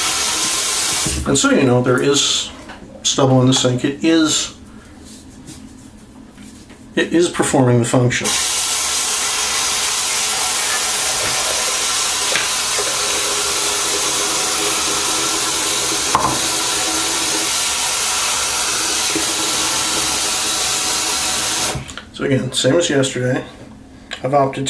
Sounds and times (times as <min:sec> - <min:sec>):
Speech: 0:01.2 - 0:04.6, 0:07.0 - 0:08.4, 0:22.2 - 0:23.6, 0:24.2 - 0:24.7.